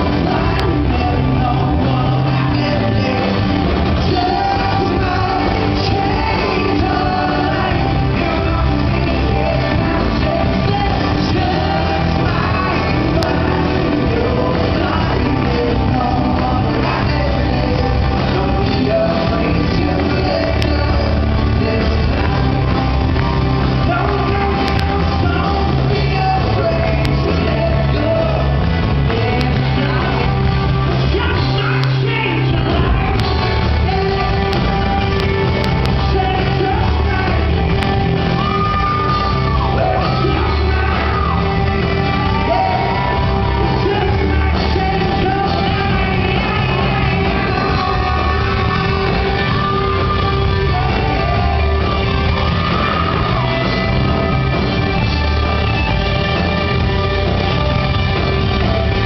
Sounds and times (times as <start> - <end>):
Inside, large room or hall: 0.0 - 59.0
Music: 0.0 - 59.0
Singing: 0.0 - 59.0.